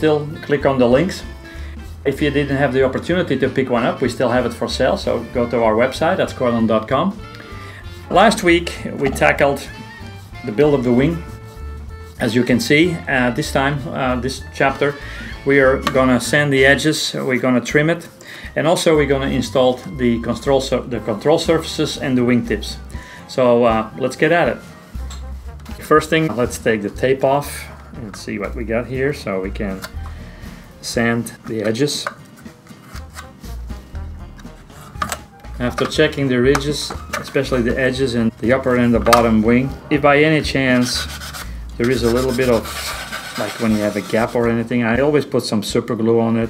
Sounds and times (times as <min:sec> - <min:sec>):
Speech: 0:00.0 - 0:01.3, 0:02.1 - 0:07.2, 0:08.1 - 0:09.7, 0:10.4 - 0:11.3, 0:12.2 - 0:24.6, 0:25.8 - 0:29.9, 0:30.8 - 0:32.2, 0:35.6 - 0:41.2, 0:41.8 - 0:46.5
Music: 0:00.0 - 0:46.5.